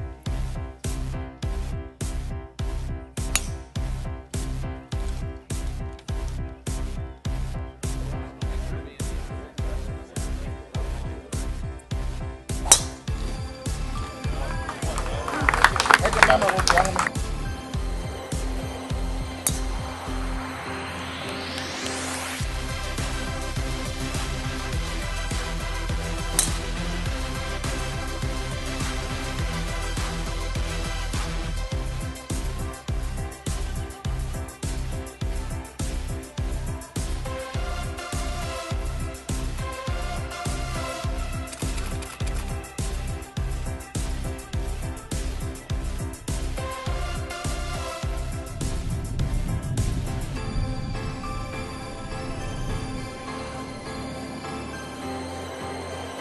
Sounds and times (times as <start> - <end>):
Music: 0.0 - 56.2.